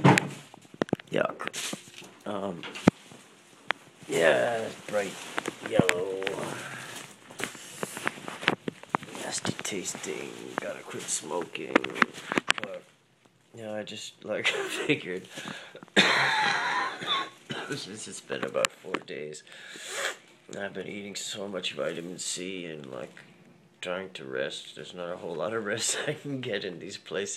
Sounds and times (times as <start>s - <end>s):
Speech: 1.1s - 1.6s, 2.2s - 2.8s, 4.1s - 6.9s, 9.2s - 12.9s, 13.6s - 15.3s, 17.7s - 19.5s, 20.5s - 23.2s, 23.8s - 27.3s
Cough: 16.0s - 17.8s.